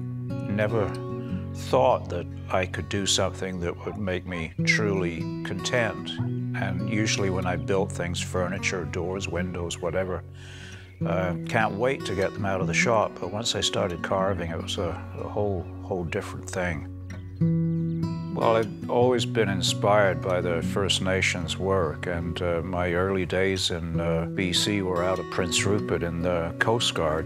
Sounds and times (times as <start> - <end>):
Music: 0.0 - 27.2
Speech: 0.5 - 1.0, 1.6 - 10.2, 11.0 - 16.9, 18.4 - 27.2.